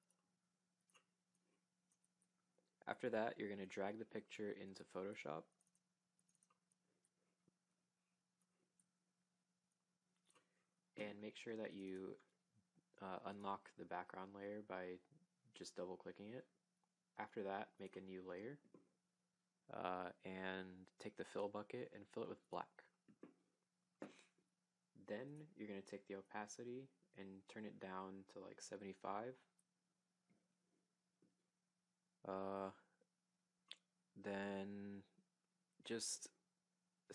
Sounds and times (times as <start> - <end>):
Speech: 2.8 - 5.5, 11.0 - 12.3, 13.0 - 16.6, 17.2 - 18.7, 19.7 - 22.9, 25.0 - 29.5, 32.3 - 32.9, 34.2 - 35.2, 35.8 - 36.4.